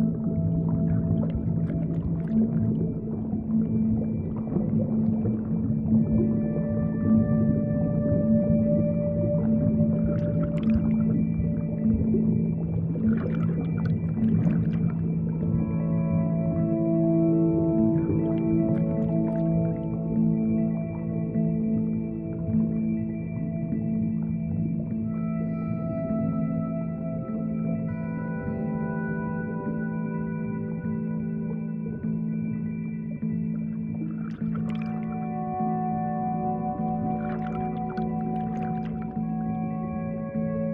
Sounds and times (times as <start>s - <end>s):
Music: 0.0s - 40.7s.